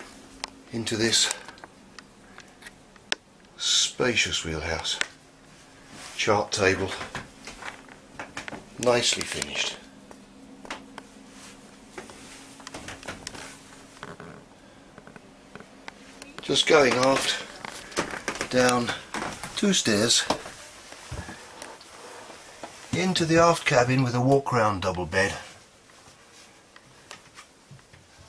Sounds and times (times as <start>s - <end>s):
Speech: 0.7s - 1.4s, 3.6s - 5.2s, 6.2s - 7.2s, 8.8s - 9.9s, 16.4s - 17.6s, 18.5s - 20.5s, 22.9s - 25.6s.